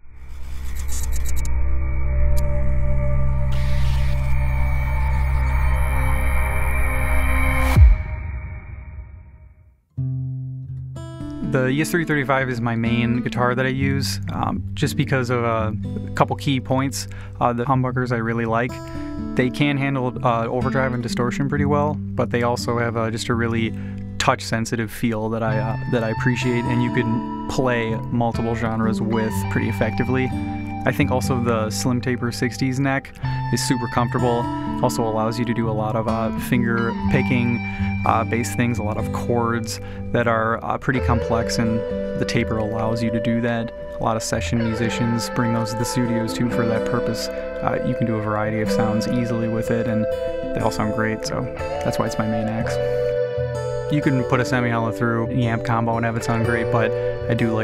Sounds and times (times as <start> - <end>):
Speech: 11.5 - 18.8, 19.4 - 52.8, 53.9 - 57.6.